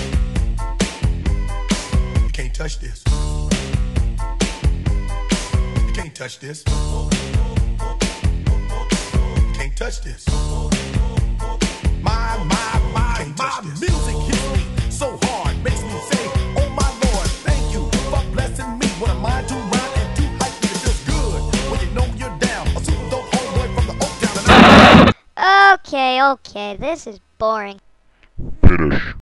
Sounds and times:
Music: 0.0s - 25.1s
Speech: 2.3s - 3.1s, 25.4s - 27.8s.

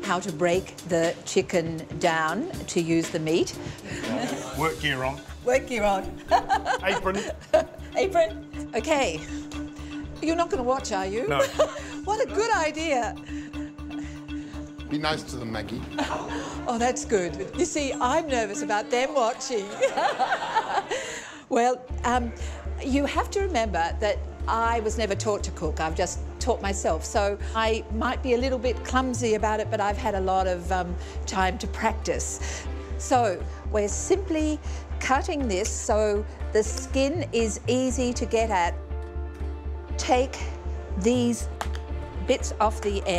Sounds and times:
Music: 0.0s - 43.1s.

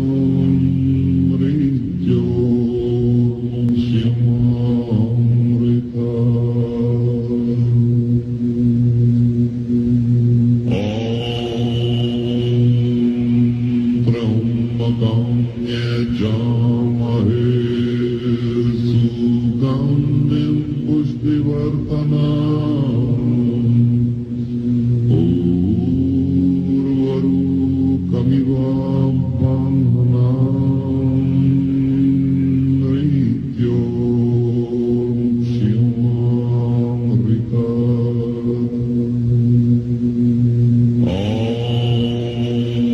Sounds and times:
Mantra: 0.0s - 9.8s, 10.6s - 42.9s.

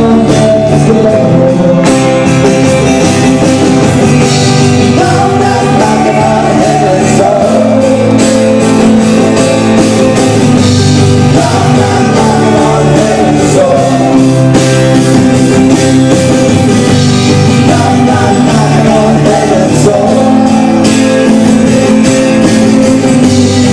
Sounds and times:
Music: 0.0s - 23.7s.

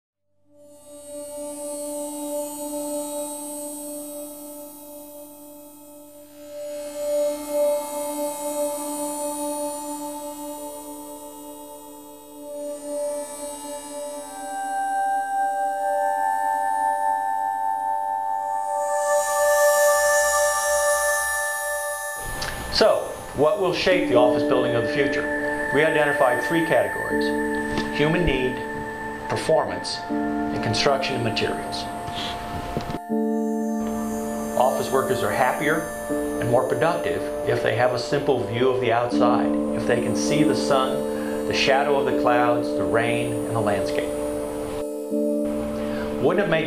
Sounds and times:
Music: 0.4s - 46.6s.

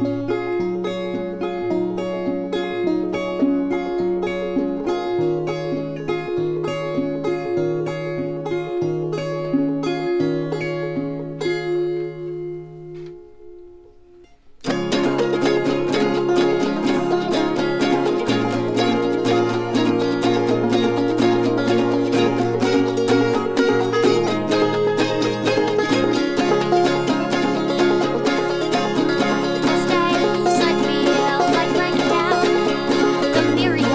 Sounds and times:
Music: 0.0s - 33.9s.

